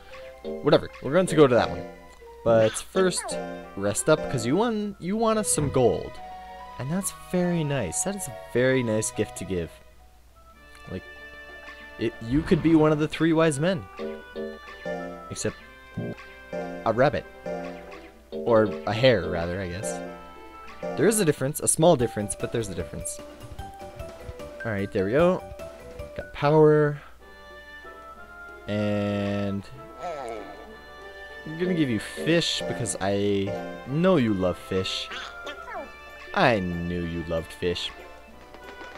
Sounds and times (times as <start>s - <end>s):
Music: 0.0s - 38.9s
Speech: 2.5s - 6.2s, 12.0s - 13.8s, 18.5s - 20.0s, 21.0s - 23.2s, 26.2s - 27.0s, 28.7s - 30.5s, 31.5s - 35.2s, 36.4s - 38.0s.